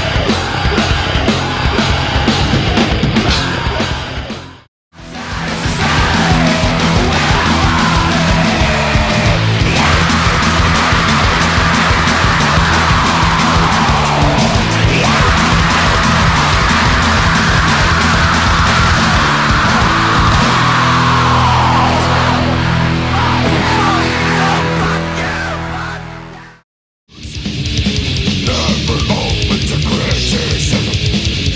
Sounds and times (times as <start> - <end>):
Heavy metal: 0.0 - 31.5.